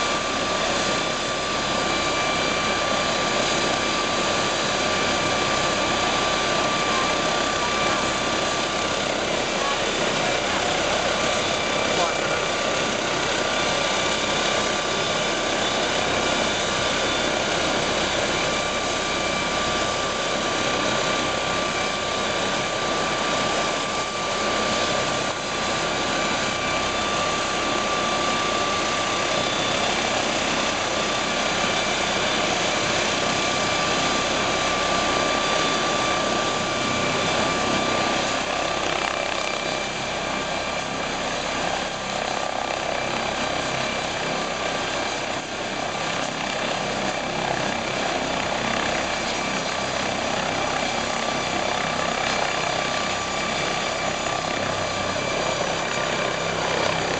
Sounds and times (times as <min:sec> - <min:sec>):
Helicopter: 0:00.0 - 0:57.1
Speech: 0:09.5 - 0:10.6, 0:11.8 - 0:12.6.